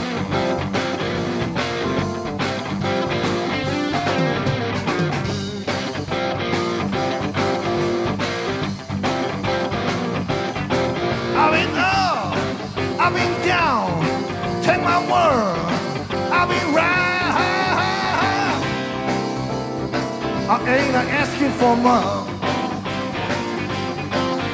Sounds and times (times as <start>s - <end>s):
Electric guitar: 0.0s - 24.5s.